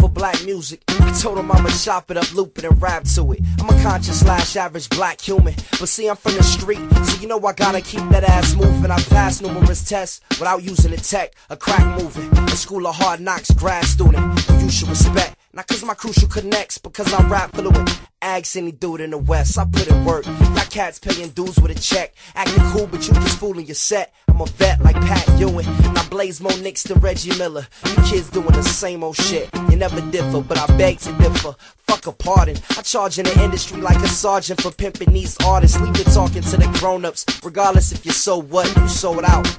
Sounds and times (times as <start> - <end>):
Music: 0.0 - 18.1, 19.2 - 23.6, 24.3 - 39.5.